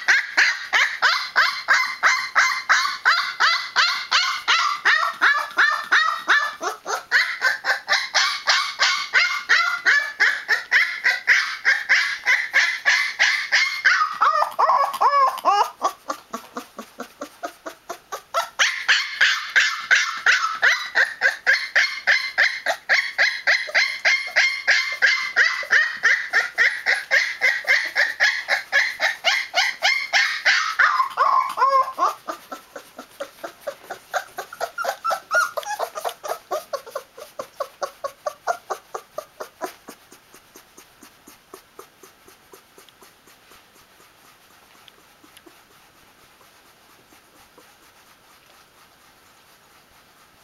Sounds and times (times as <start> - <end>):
Canidae, dogs, wolves: 0.0 - 50.4
Dog: 0.0 - 50.4.